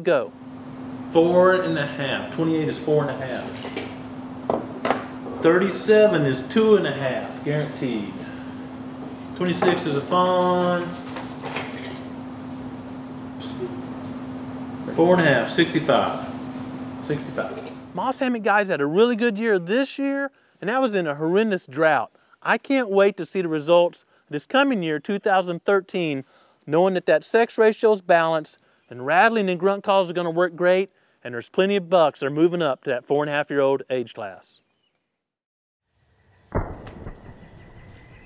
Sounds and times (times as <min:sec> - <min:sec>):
Speech: 0:00.0 - 0:00.3, 0:01.1 - 0:03.6, 0:05.4 - 0:08.3, 0:09.4 - 0:11.0, 0:14.9 - 0:16.3, 0:17.0 - 0:34.6.